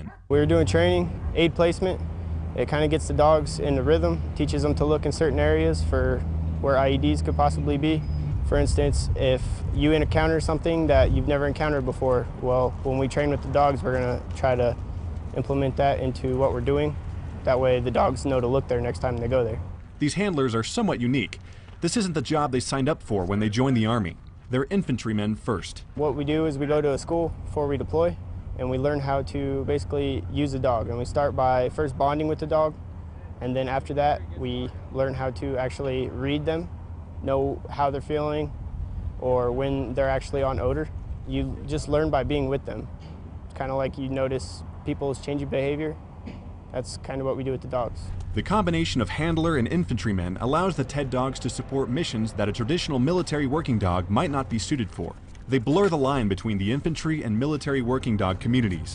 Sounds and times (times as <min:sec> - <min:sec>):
Speech: 0:00.0 - 0:02.0, 0:02.6 - 0:32.8, 0:33.4 - 0:38.5, 0:39.2 - 0:42.9, 0:43.5 - 0:46.0, 0:46.7 - 0:58.9.